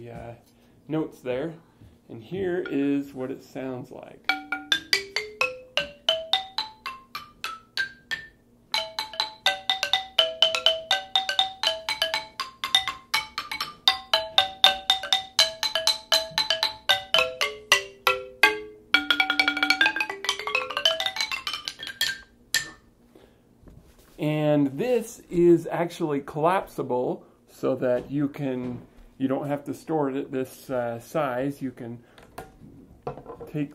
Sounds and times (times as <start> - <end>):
Marimba, xylophone: 4.3 - 22.8.